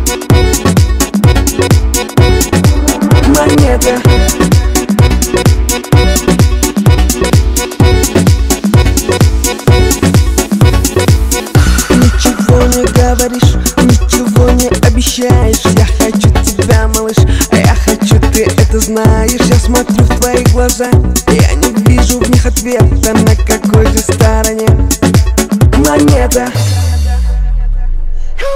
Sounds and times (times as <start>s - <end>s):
Theme music: 0.0s - 8.2s, 8.9s - 14.8s.